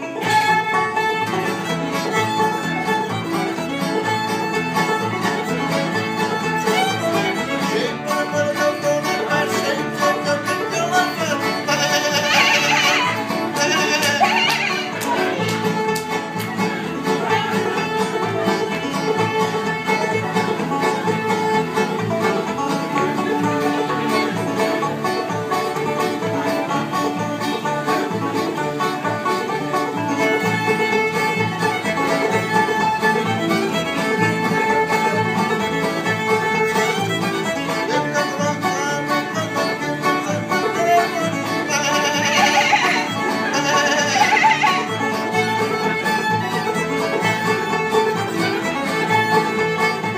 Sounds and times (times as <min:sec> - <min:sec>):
Banjo: 0:00.0 - 0:50.1
Guitar: 0:00.0 - 0:50.1.